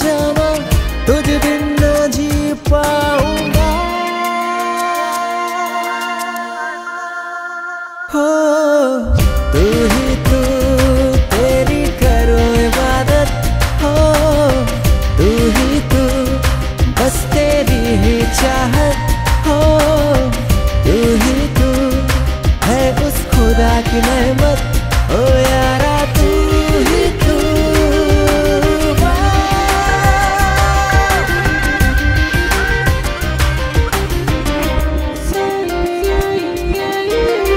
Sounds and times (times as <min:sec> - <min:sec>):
Music of Bollywood: 0:00.0 - 0:37.5.